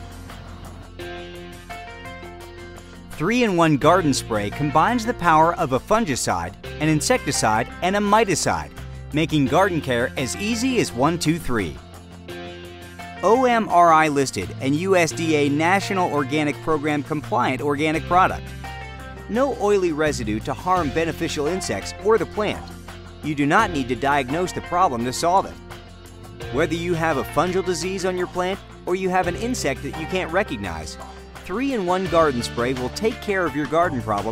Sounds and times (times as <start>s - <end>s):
Music: 0.0s - 34.3s
Speech: 3.2s - 11.8s, 13.2s - 18.4s, 19.3s - 25.6s, 26.5s - 34.3s.